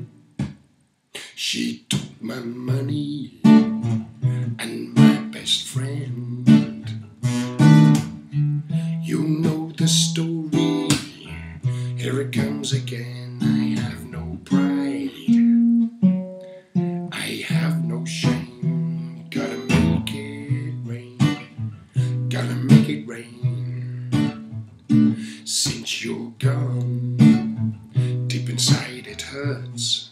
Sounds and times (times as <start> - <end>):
Music: 1.9 - 30.1.